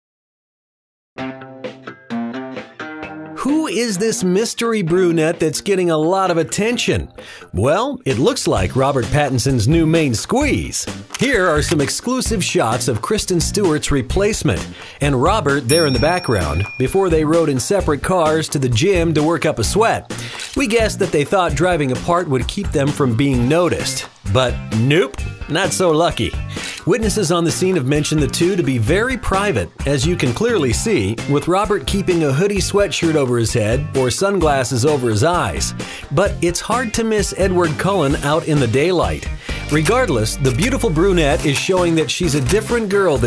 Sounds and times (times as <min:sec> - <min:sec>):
Music: 0:01.2 - 0:43.2
Speech: 0:03.4 - 0:43.2.